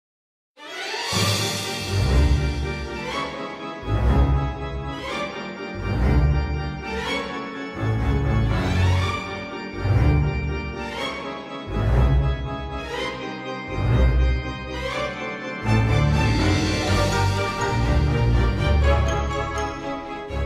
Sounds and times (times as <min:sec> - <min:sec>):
Organ: 0:01.4 - 0:20.4.